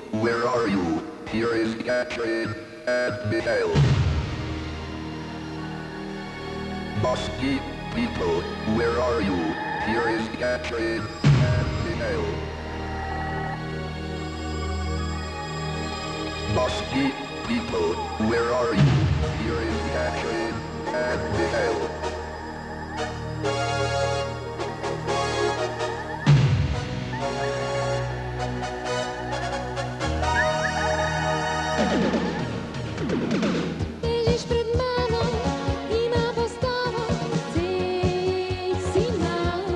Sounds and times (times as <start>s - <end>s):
Speech: 0.1s - 3.9s, 7.0s - 12.4s, 16.5s - 21.9s
Music: 2.5s - 39.7s.